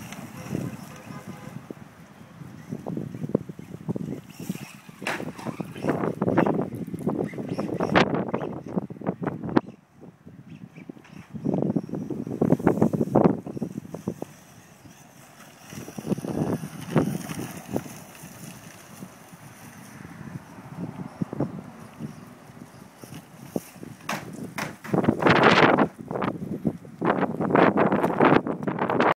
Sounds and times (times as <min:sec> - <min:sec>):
Car: 0:11.0 - 0:24.1.